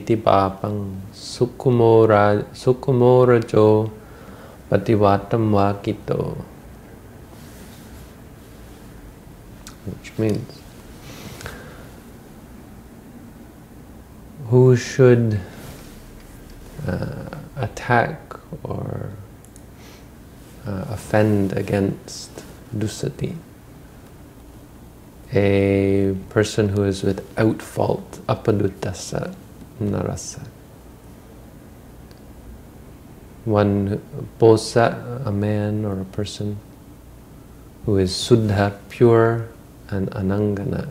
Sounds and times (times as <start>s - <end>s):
Speech: 0.0s - 4.0s, 4.7s - 6.5s, 9.7s - 10.6s, 14.4s - 15.6s, 16.8s - 19.3s, 20.6s - 23.5s, 25.3s - 30.6s, 33.4s - 36.7s, 37.8s - 40.9s.